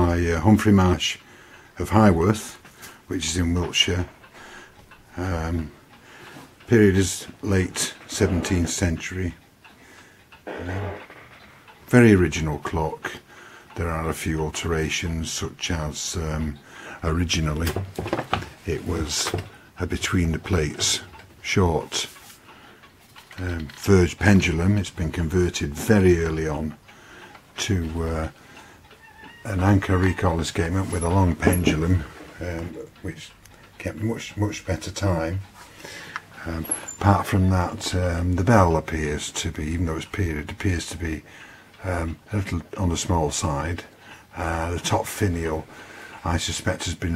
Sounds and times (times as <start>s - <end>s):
Speech: 0.0s - 4.2s, 5.1s - 5.8s, 6.7s - 9.4s, 11.9s - 22.2s, 23.4s - 26.8s, 27.6s - 28.4s, 29.4s - 35.5s, 36.4s - 47.1s.